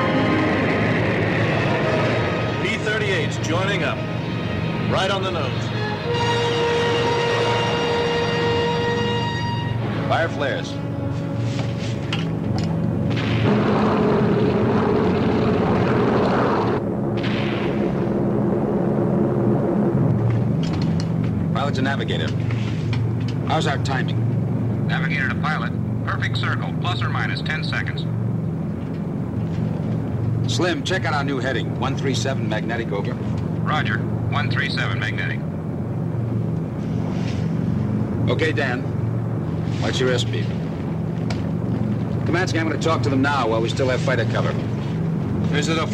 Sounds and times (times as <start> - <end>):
Music: 0.0 - 13.0.